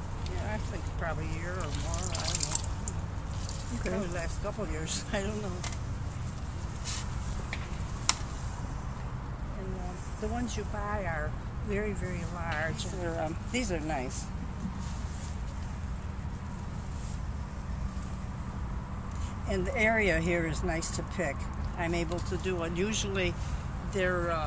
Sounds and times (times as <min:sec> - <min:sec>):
Outside, rural or natural: 0:00.0 - 0:24.4
Speech: 0:00.3 - 0:02.6, 0:03.7 - 0:05.6, 0:19.5 - 0:24.4.